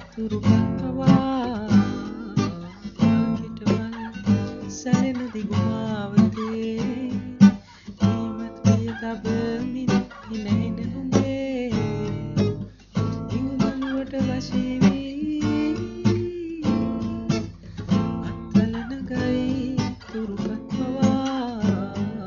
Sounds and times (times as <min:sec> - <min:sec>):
Acoustic guitar: 0:00.0 - 0:22.2
Strum: 0:00.0 - 0:22.2.